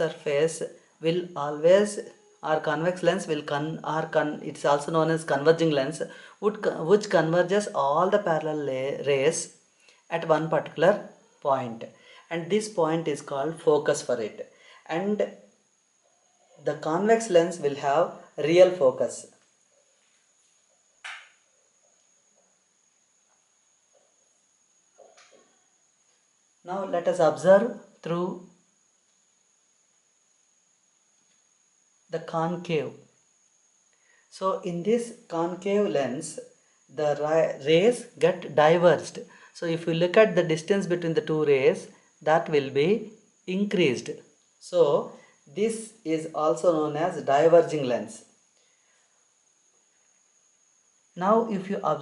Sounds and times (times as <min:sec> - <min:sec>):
Speech: 0:00.0 - 0:15.3, 0:16.6 - 0:19.3, 0:26.7 - 0:28.4, 0:32.1 - 0:33.0, 0:34.3 - 0:48.3, 0:51.2 - 0:52.0.